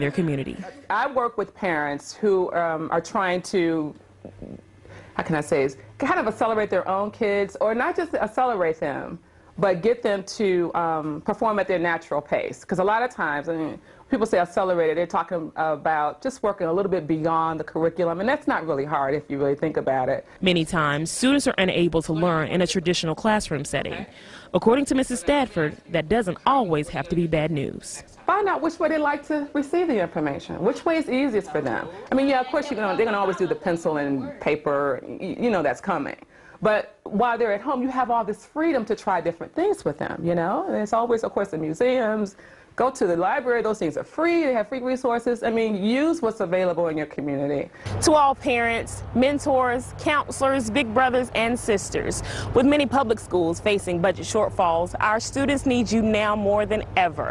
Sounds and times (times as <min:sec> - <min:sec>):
Speech: 0:05.2 - 0:57.3.